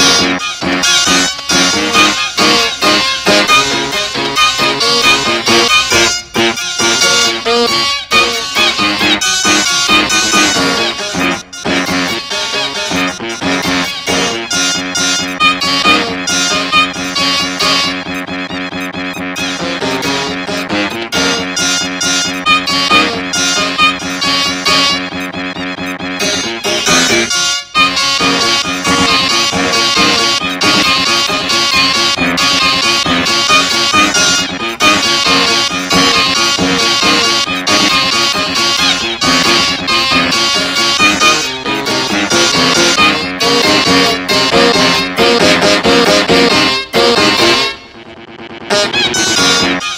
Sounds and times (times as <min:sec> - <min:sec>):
Music: 0:00.0 - 0:48.0, 0:48.6 - 0:49.9.